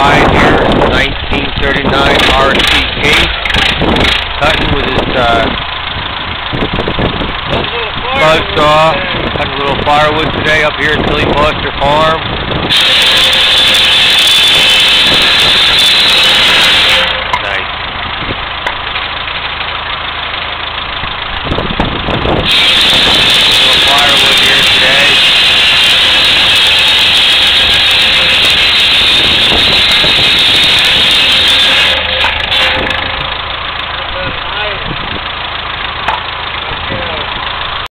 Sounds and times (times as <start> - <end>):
Speech: 0.0 - 3.3, 4.4 - 5.6, 7.6 - 12.2, 17.4 - 17.7, 23.5 - 25.2, 34.0 - 34.9, 36.6 - 37.3.